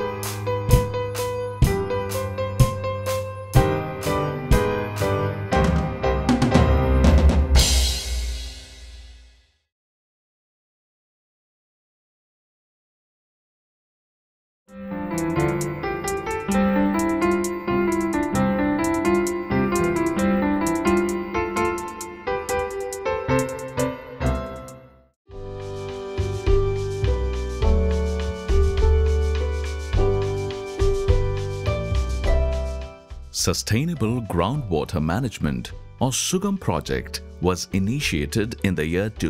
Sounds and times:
Music: 0.0s - 9.7s, 14.7s - 39.2s
Speech: 33.3s - 39.2s.

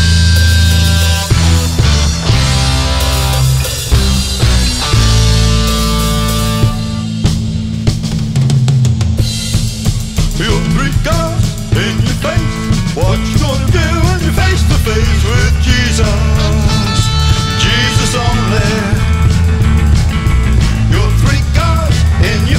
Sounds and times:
Christmas music: 0.0s - 7.2s, 11.8s - 22.5s.

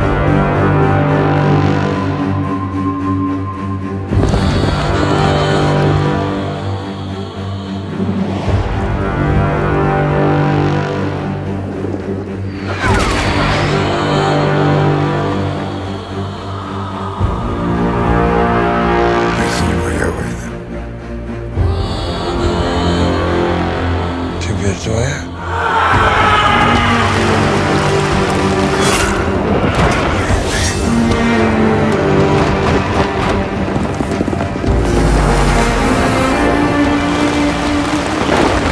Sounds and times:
Music: 0.0s - 38.7s
Speech: 19.3s - 20.6s, 24.4s - 25.4s.

